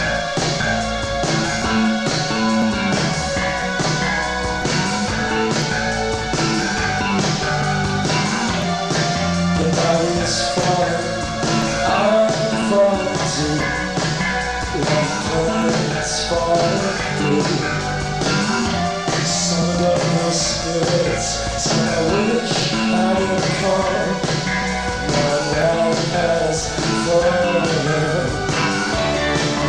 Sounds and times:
Inside, large room or hall: 0.0s - 29.6s
Music: 0.0s - 29.6s.

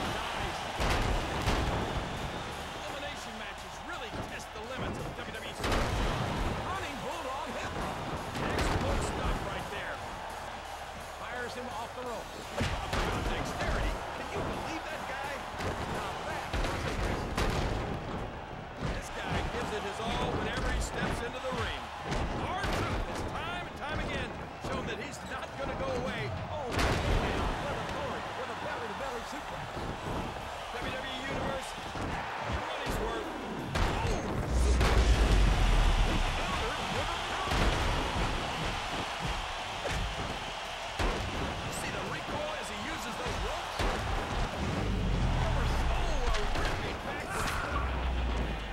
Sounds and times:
Music: 0.0s - 48.7s
Speech: 2.8s - 5.7s, 6.6s - 10.0s, 11.2s - 17.2s, 18.9s - 29.6s, 30.7s - 31.8s, 32.6s - 34.8s, 36.4s - 37.7s, 41.7s - 43.8s, 45.2s - 48.0s.

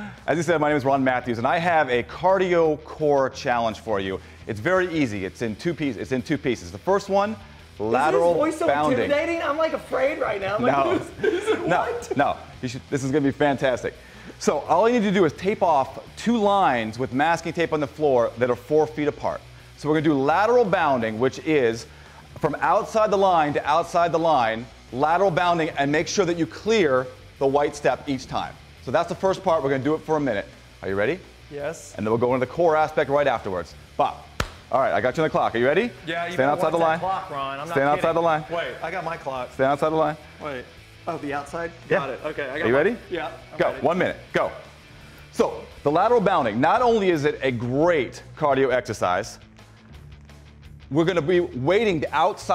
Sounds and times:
Speech: 0.3s - 44.6s, 45.4s - 49.4s, 50.9s - 52.5s.

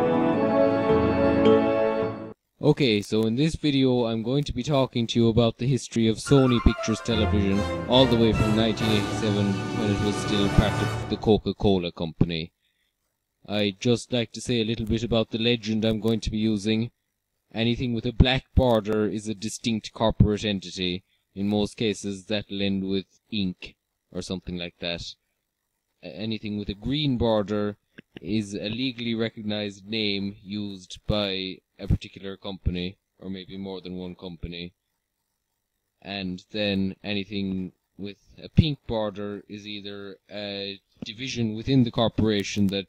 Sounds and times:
Speech: 2.6s - 12.5s, 13.4s - 25.2s, 26.0s - 34.8s, 36.0s - 42.8s.

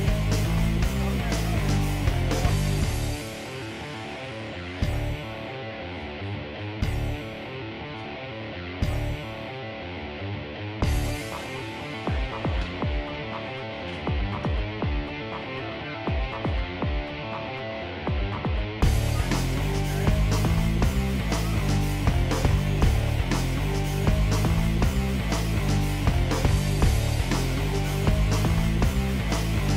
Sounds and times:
Music: 0.0s - 29.7s.

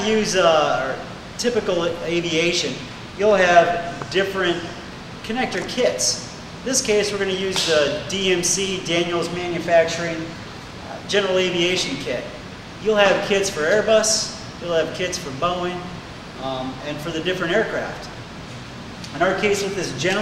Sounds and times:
Speech: 0.0s - 18.2s, 19.1s - 20.2s.

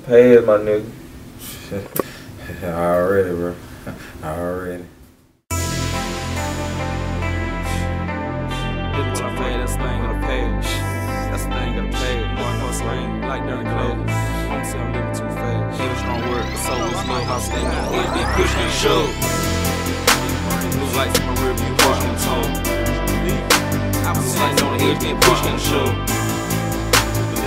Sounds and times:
Rhythm and blues: 5.5s - 27.4s.

